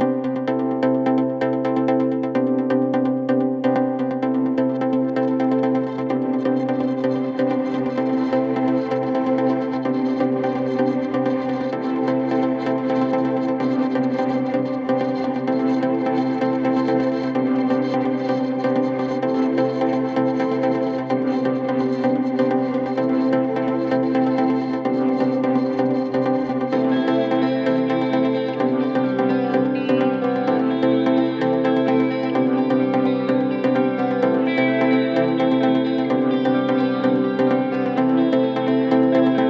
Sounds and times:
Music: 0.0 - 39.5.

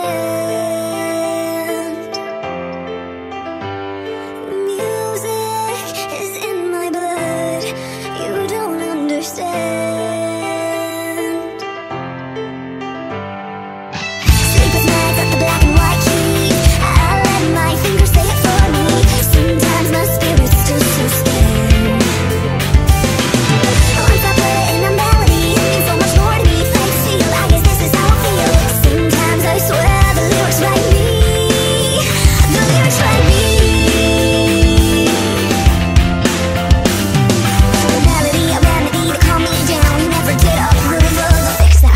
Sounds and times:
Rock and roll: 13.9 - 41.9.

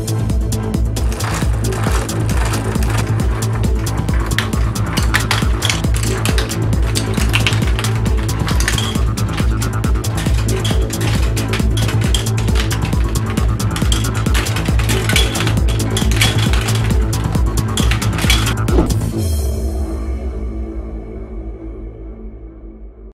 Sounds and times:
Mechanisms: 1.0 - 19.0.

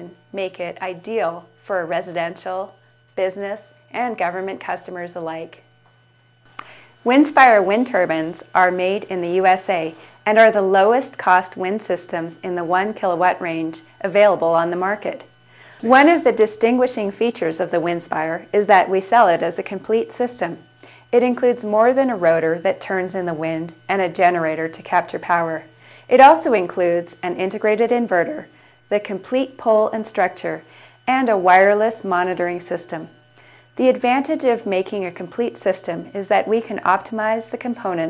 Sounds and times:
Speech: 0.0 - 5.6, 7.1 - 15.2, 15.8 - 33.1, 33.8 - 38.1.

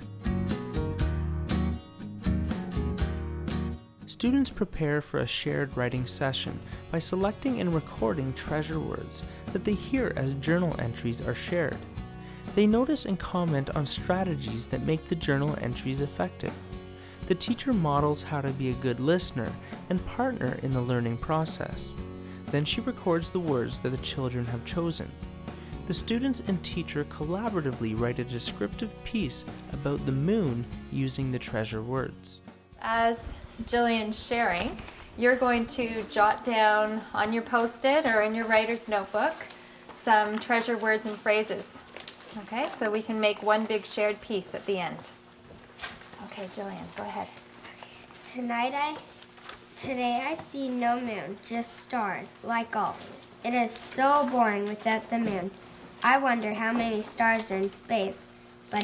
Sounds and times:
Music: 0.0 - 41.7, 53.4 - 58.8
Speech: 4.1 - 11.8, 12.6 - 16.6, 17.3 - 21.9, 22.5 - 25.1, 25.9 - 41.8, 42.4 - 45.2, 49.8 - 58.8.

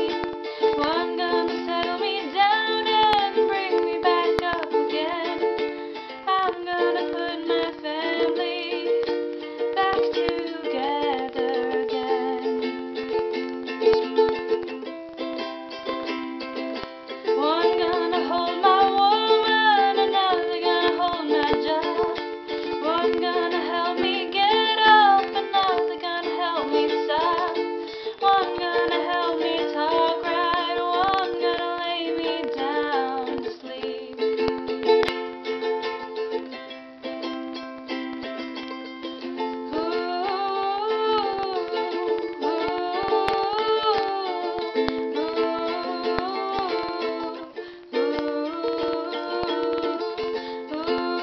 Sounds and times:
Music: 0.0 - 51.2.

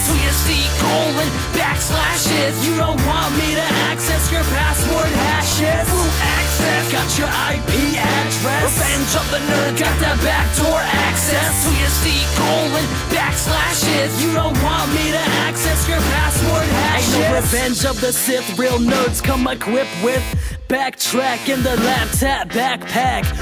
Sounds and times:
Music: 0.0 - 23.4.

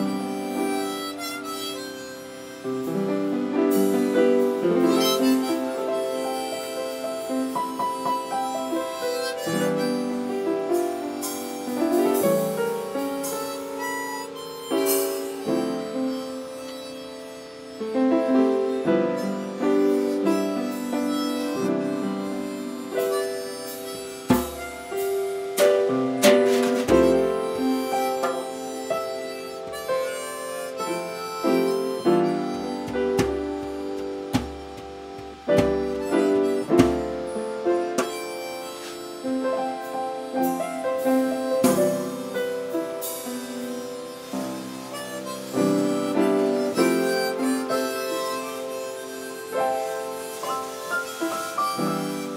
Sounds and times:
Harmonica: 0.0 - 52.3
Piano: 0.0 - 52.3
Drum: 24.3 - 25.0, 32.9 - 36.2.

